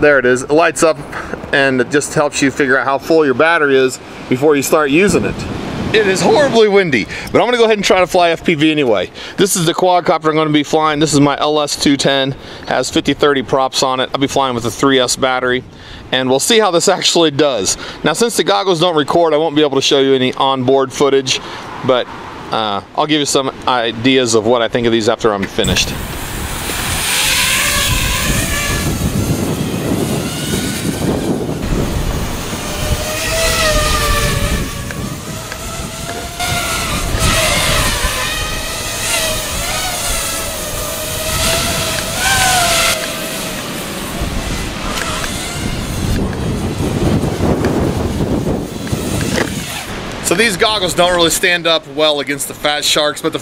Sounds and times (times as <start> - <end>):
Speech: 0.0 - 26.0, 50.2 - 53.4.